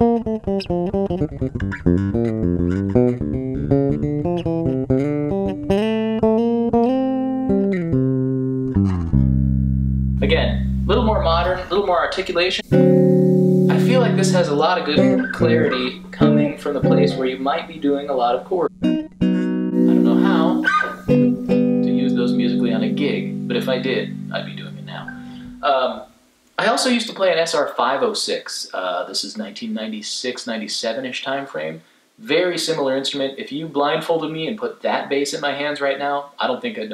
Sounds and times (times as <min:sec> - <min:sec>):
Bass guitar: 0:00.0 - 0:26.1
Inside, small room: 0:00.0 - 0:36.9
Speech: 0:10.2 - 0:12.7, 0:13.7 - 0:18.7, 0:19.9 - 0:20.7, 0:21.9 - 0:36.9.